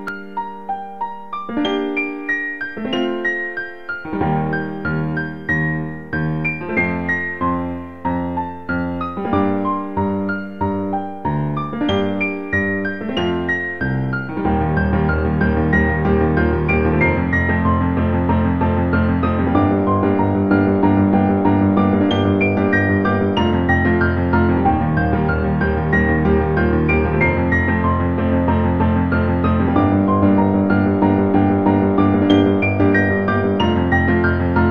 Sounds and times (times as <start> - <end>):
Electric piano: 0.0 - 34.7
Electronic music: 1.7 - 34.7.